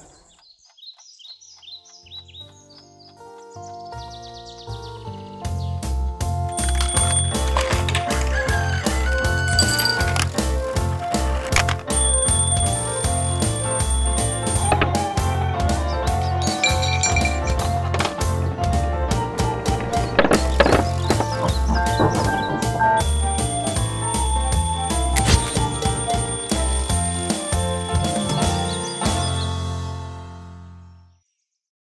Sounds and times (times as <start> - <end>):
Music: 1.8 - 31.1.